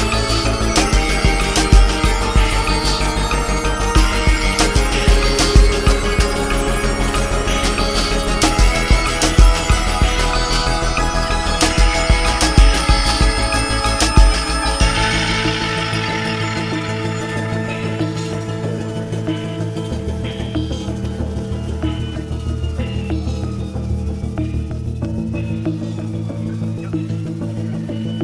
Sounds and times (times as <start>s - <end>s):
Music: 0.0s - 28.2s.